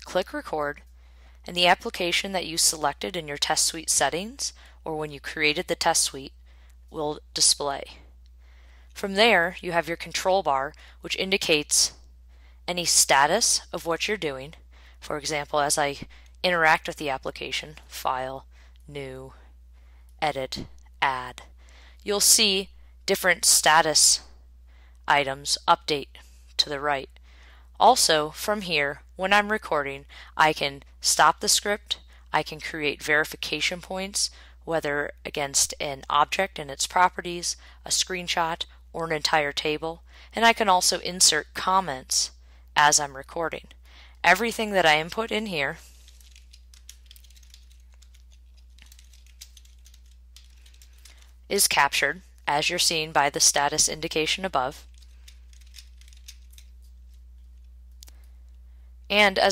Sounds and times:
Speech: 0.0 - 0.8, 1.5 - 6.3, 7.0 - 8.0, 9.0 - 12.0, 12.7 - 19.4, 20.2 - 24.3, 25.1 - 27.1, 27.8 - 43.7, 44.3 - 45.8, 51.5 - 54.8, 59.1 - 59.5.

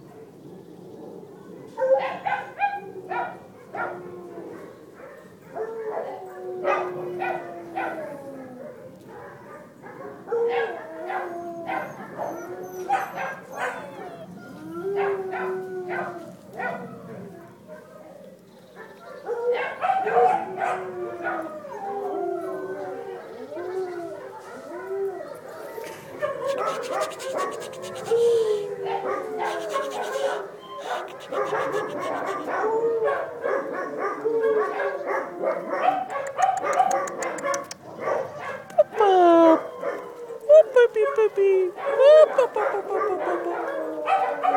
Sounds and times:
Bow-wow: 8.7 - 14.3, 18.8 - 21.4, 25.7 - 28.2, 28.9 - 38.8, 41.8 - 44.5.

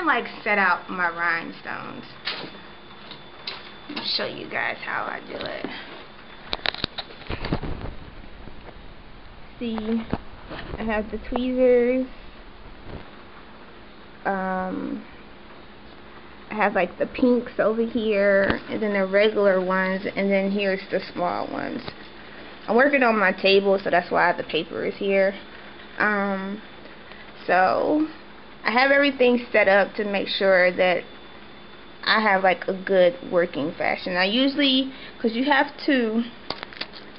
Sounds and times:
Speech: 0.0 - 2.2, 3.9 - 5.8, 9.6 - 10.1, 10.8 - 12.1, 14.3 - 15.1, 16.5 - 21.9, 22.7 - 25.4, 26.0 - 26.6, 27.4 - 31.1, 32.0 - 36.4
Inside, small room: 0.0 - 37.1.

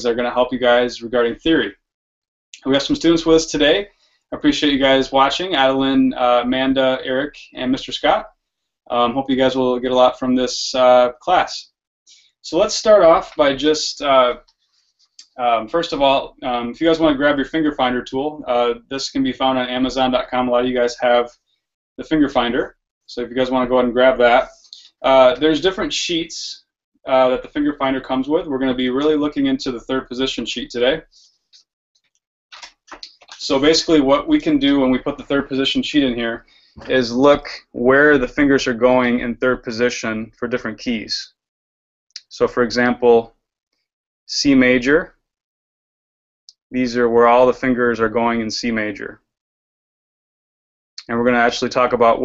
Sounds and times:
Speech: 0.0 - 1.8, 2.6 - 11.8, 12.4 - 14.5, 15.2 - 21.4, 22.0 - 31.1, 32.6 - 41.4, 42.2 - 43.4, 44.3 - 45.2, 46.5 - 49.3, 51.0 - 52.2.

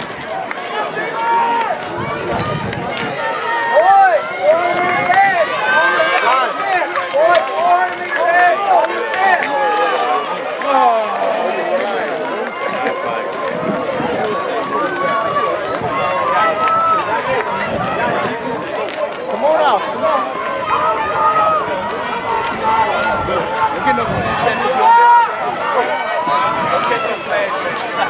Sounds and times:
Outside, urban or manmade: 0.0 - 28.0
Speech: 0.0 - 28.0.

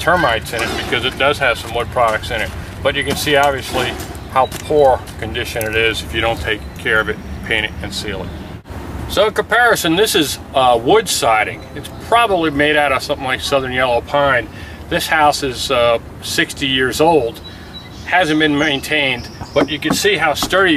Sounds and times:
Speech: 0.0 - 8.3, 9.1 - 17.4, 18.1 - 20.7.

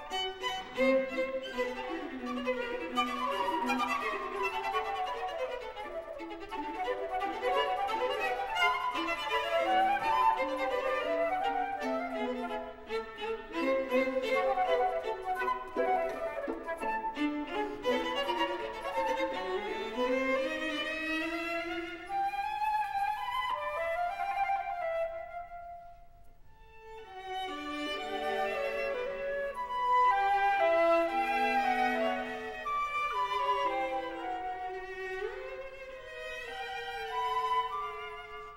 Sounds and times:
Violin, fiddle: 0.0 - 25.4, 26.6 - 38.5
Flute: 0.0 - 38.5.

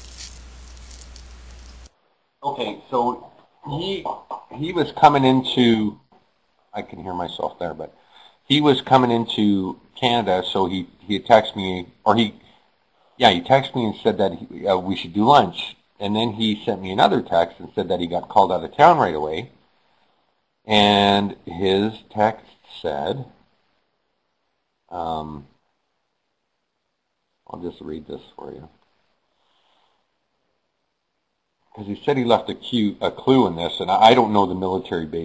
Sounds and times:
Speech: 2.4 - 6.0, 6.7 - 12.4, 13.2 - 19.6, 20.6 - 23.4, 24.9 - 25.6, 27.4 - 28.8, 31.7 - 35.2.

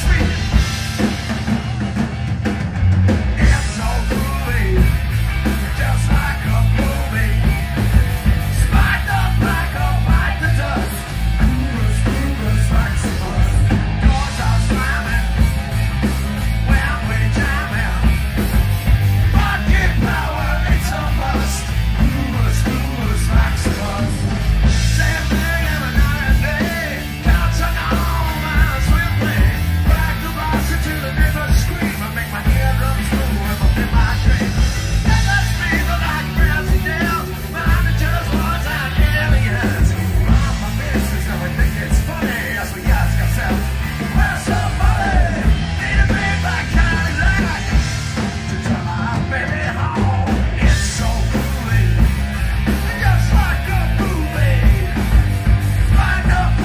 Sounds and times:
Music: 0.0 - 56.6
Singing: 3.4 - 15.7, 16.6 - 18.5, 19.2 - 56.6.

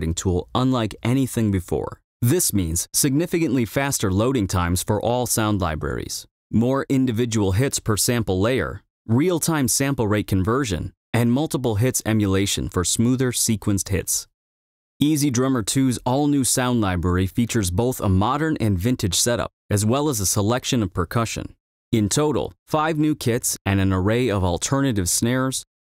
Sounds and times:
Speech: 0.0 - 14.3, 15.0 - 25.8.

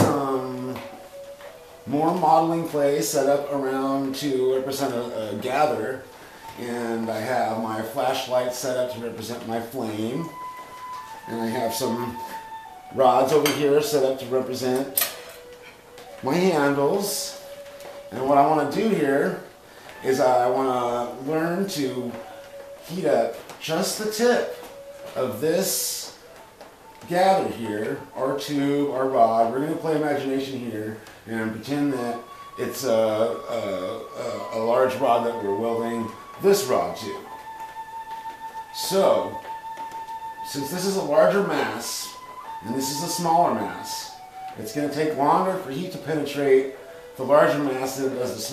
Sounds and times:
Speech: 0.0 - 1.0, 1.8 - 10.4, 11.3 - 15.0, 16.2 - 17.4, 18.1 - 24.6, 25.2 - 26.2, 27.0 - 37.3, 38.7 - 39.5, 40.4 - 48.5
Music: 0.0 - 48.5.

